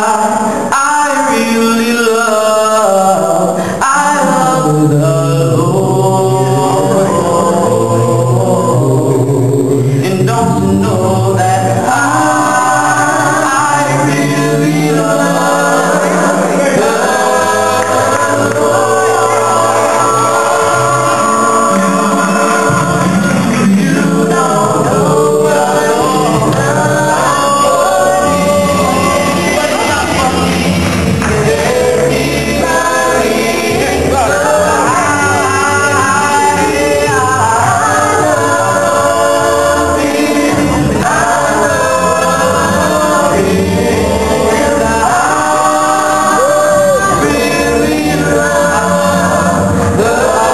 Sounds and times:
Choir: 0.0s - 50.5s.

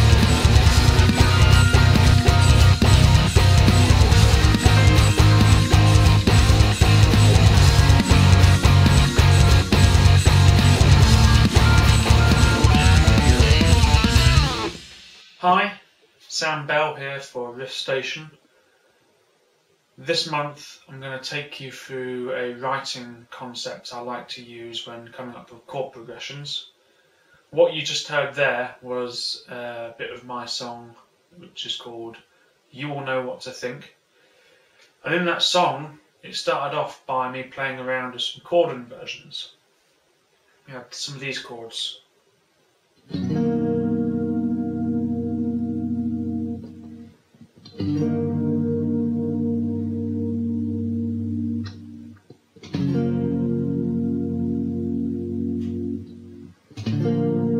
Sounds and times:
Speech: 15.4s - 18.4s, 20.0s - 26.7s, 27.5s - 34.0s, 35.0s - 39.6s, 40.7s - 42.1s.

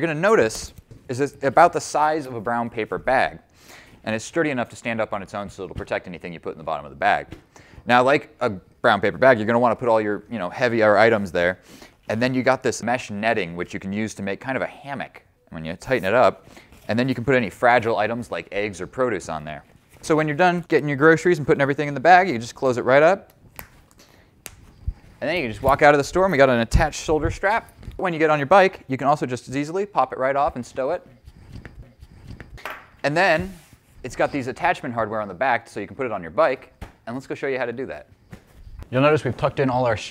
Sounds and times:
Speech: 0.0s - 3.4s, 4.0s - 23.3s, 25.2s - 31.1s, 33.0s - 38.1s, 38.9s - 40.1s.

